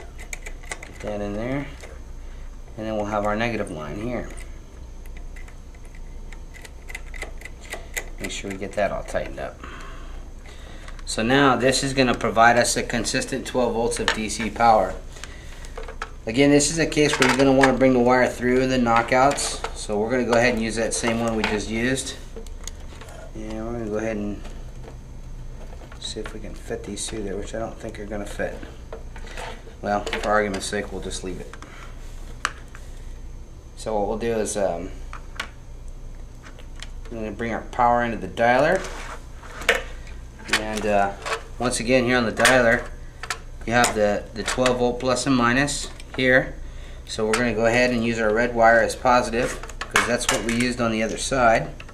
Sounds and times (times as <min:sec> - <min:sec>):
Speech: 0:01.0 - 0:01.8, 0:02.8 - 0:04.4, 0:08.2 - 0:09.6, 0:11.1 - 0:15.0, 0:16.3 - 0:22.2, 0:23.3 - 0:24.4, 0:26.0 - 0:28.7, 0:29.8 - 0:31.6, 0:33.8 - 0:35.0, 0:37.1 - 0:38.9, 0:40.5 - 0:42.9, 0:43.6 - 0:51.8.